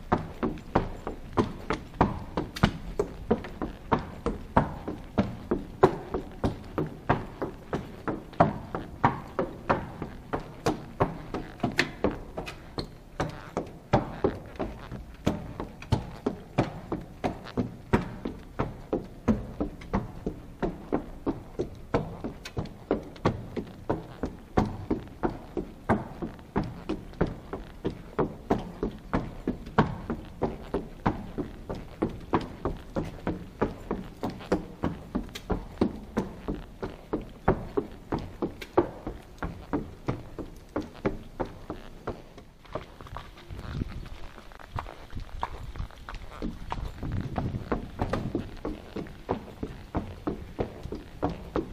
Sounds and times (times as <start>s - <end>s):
Clip-clop: 0.0s - 51.7s.